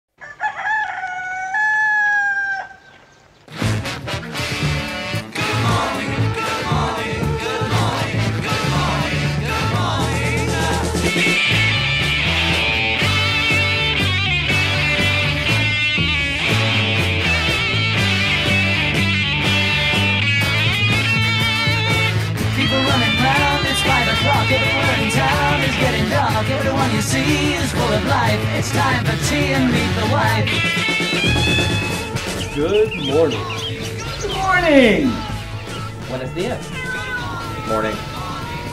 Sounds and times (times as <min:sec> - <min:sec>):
Crowing, cock-a-doodle-doo: 0:00.2 - 0:03.0
Music: 0:03.5 - 0:38.7.